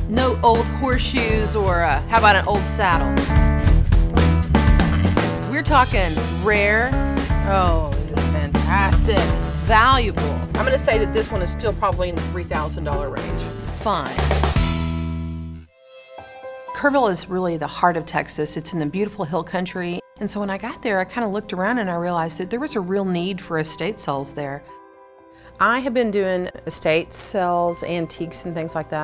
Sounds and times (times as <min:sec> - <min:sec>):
Music: 0:00.0 - 0:29.0
Speech: 0:00.1 - 0:03.2, 0:05.5 - 0:14.3, 0:16.8 - 0:24.7, 0:25.6 - 0:29.0.